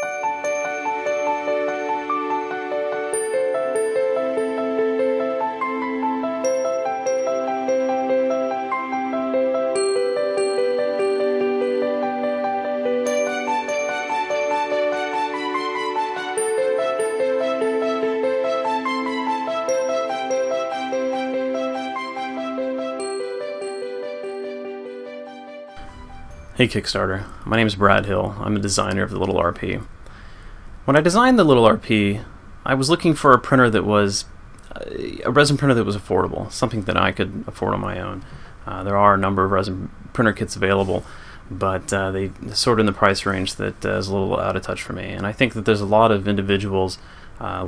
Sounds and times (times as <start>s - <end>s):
Music: 0.0s - 28.3s.